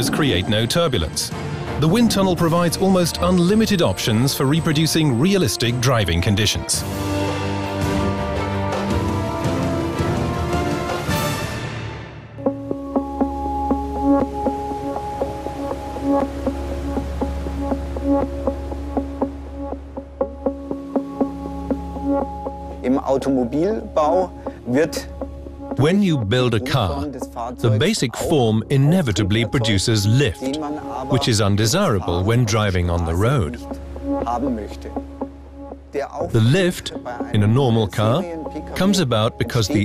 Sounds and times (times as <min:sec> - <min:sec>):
Speech synthesizer: 0:25.8 - 0:33.3.